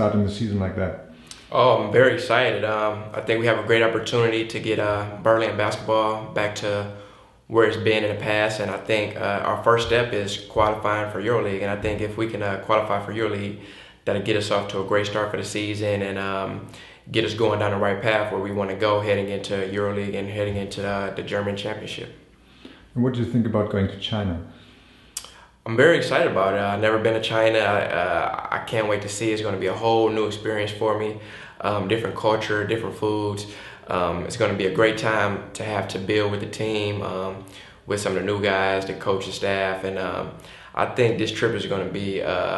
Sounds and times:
Speech: 0:00.0 - 0:22.2, 0:23.0 - 0:24.6, 0:25.2 - 0:42.5.

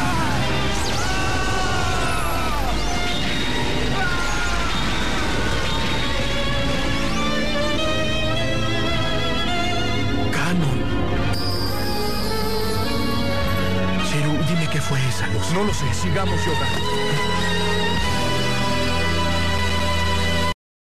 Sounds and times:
Music: 0:00.0 - 0:20.6
Speech: 0:14.0 - 0:17.4.

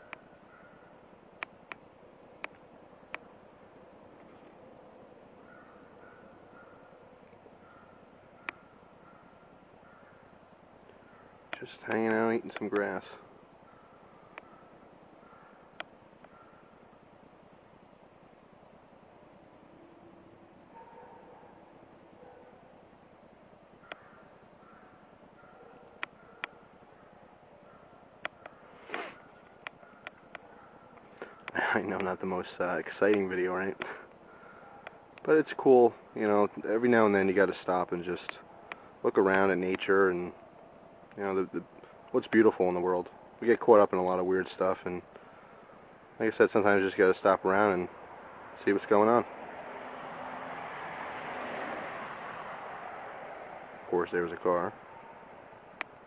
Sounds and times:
Speech: 0:11.6 - 0:13.2, 0:31.6 - 0:33.8, 0:35.3 - 0:38.4, 0:39.0 - 0:40.4, 0:41.2 - 0:45.0, 0:46.2 - 0:47.9, 0:48.6 - 0:49.3, 0:53.9 - 0:54.8.

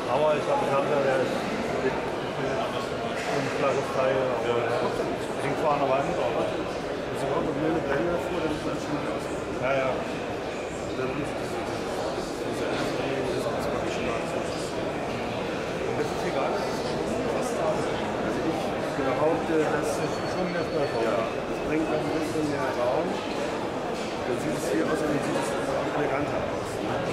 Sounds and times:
Speech: 0:00.0 - 0:27.1.

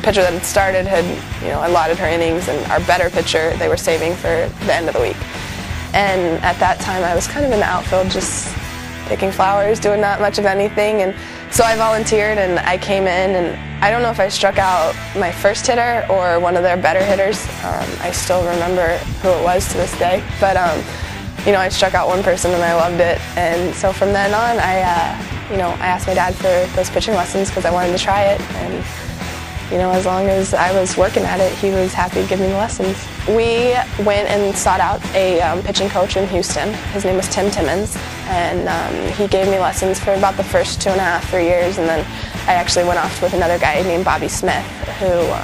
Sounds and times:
Speech: 0:00.0 - 0:05.2, 0:05.9 - 0:28.9, 0:29.7 - 0:45.4
Music: 0:00.0 - 0:45.4.

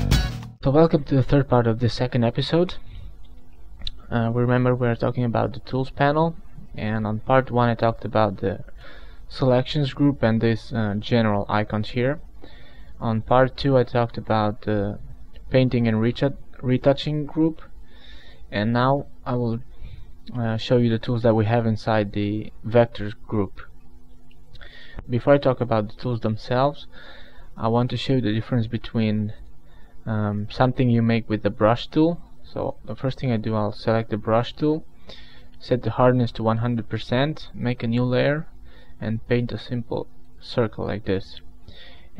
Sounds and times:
Speech: 0:00.6 - 0:02.8, 0:03.9 - 0:08.7, 0:09.3 - 0:12.2, 0:13.0 - 0:17.7, 0:18.5 - 0:19.6, 0:20.3 - 0:23.8, 0:25.1 - 0:26.9, 0:27.6 - 0:29.4, 0:30.0 - 0:34.9, 0:35.6 - 0:41.5.

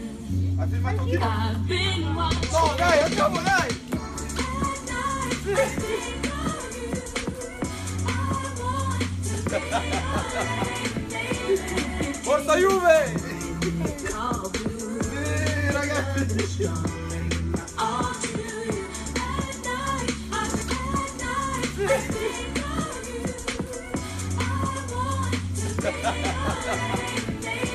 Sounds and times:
Music: 0:00.0 - 0:27.7.

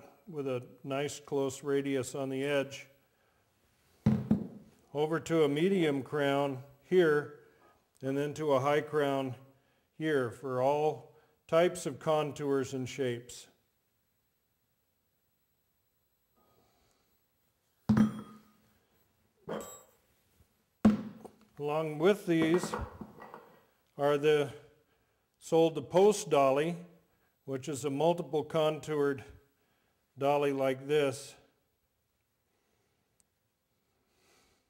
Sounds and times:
Speech: 0:00.0 - 0:02.9, 0:04.9 - 0:07.4, 0:08.0 - 0:09.4, 0:10.0 - 0:13.6, 0:21.6 - 0:22.9, 0:24.0 - 0:24.7, 0:25.4 - 0:26.9, 0:27.5 - 0:29.4, 0:30.2 - 0:31.5.

